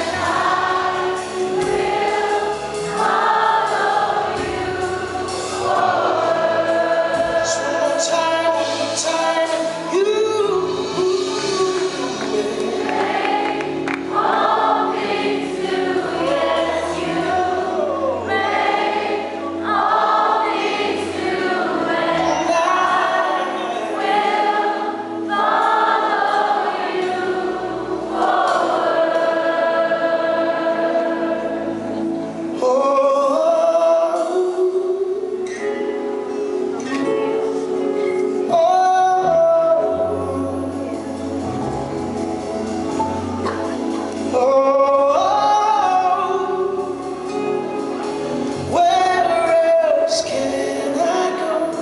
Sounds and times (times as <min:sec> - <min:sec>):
Singing: 0:00.0 - 0:35.8, 0:36.8 - 0:41.6, 0:43.8 - 0:47.6, 0:48.6 - 0:51.8
Gospel music: 0:00.0 - 0:51.8.